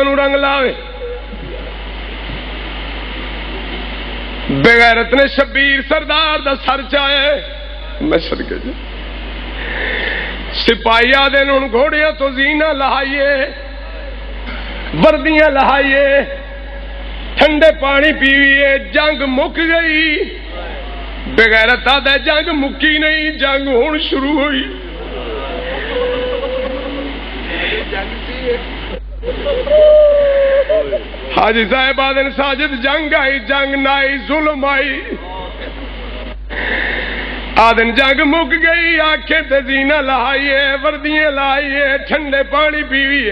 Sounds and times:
Speech: 0:08.0 - 0:08.8, 0:27.5 - 0:28.7, 0:30.7 - 0:36.4.

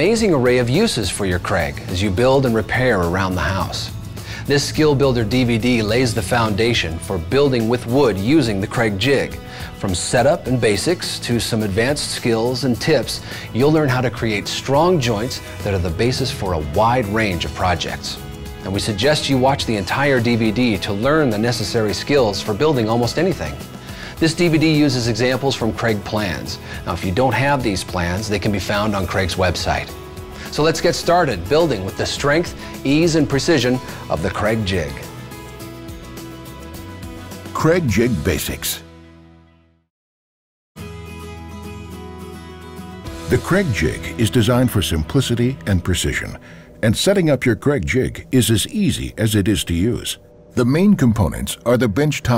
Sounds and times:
Speech: 0:00.0 - 0:35.1, 0:37.5 - 0:38.8, 0:43.3 - 0:52.3
Music: 0:00.0 - 0:39.9, 0:40.8 - 0:52.3.

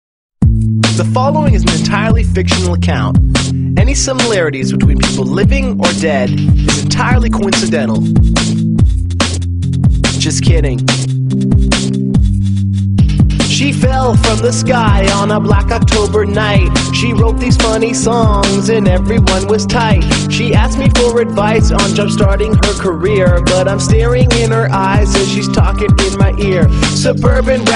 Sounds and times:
Music: 0:00.4 - 0:27.7
Speech: 0:01.0 - 0:03.2, 0:03.8 - 0:08.0, 0:10.2 - 0:10.8, 0:13.5 - 0:17.8.

